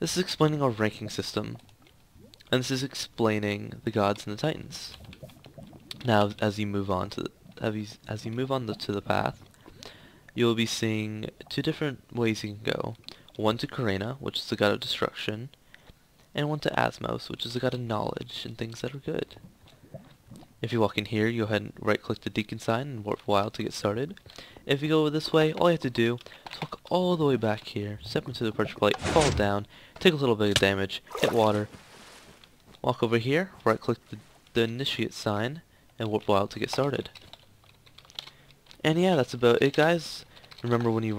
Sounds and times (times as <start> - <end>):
Speech: 0.0 - 1.6, 2.5 - 5.0, 6.0 - 9.4, 10.4 - 15.5, 16.4 - 19.4, 20.6 - 31.7, 32.8 - 37.2, 38.8 - 41.1
Liquid: 0.8 - 13.8, 17.5 - 29.6.